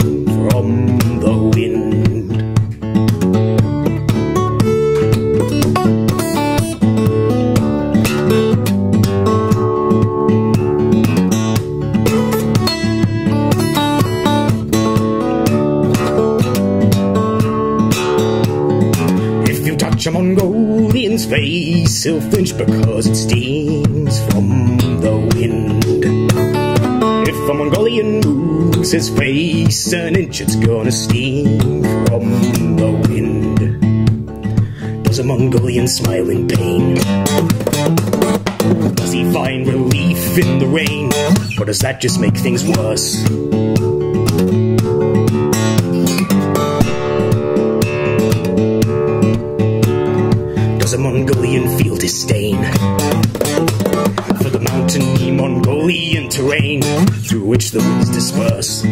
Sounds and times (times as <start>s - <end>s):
Acoustic guitar: 0.0s - 58.9s.